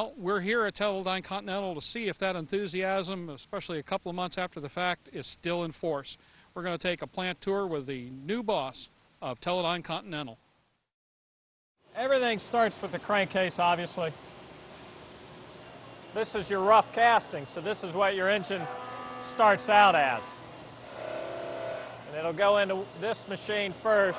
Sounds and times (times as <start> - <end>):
Speech: 0.0 - 10.4, 12.0 - 14.2, 16.2 - 20.4, 22.1 - 24.1.